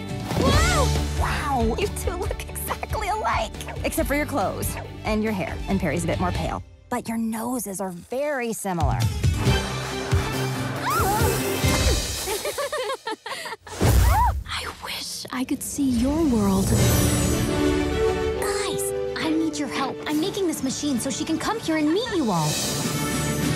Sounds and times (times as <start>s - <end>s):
Music: 0.0s - 23.5s.